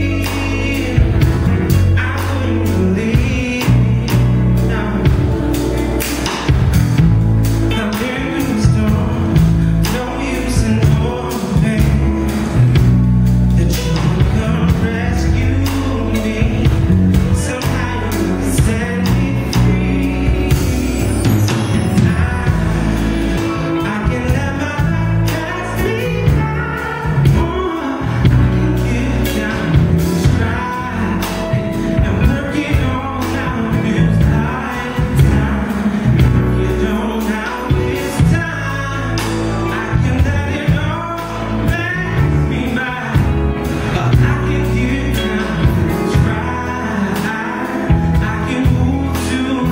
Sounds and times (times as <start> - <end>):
Male singing: 0.0 - 6.6, 7.6 - 12.9, 13.5 - 49.7
Music: 0.0 - 49.7.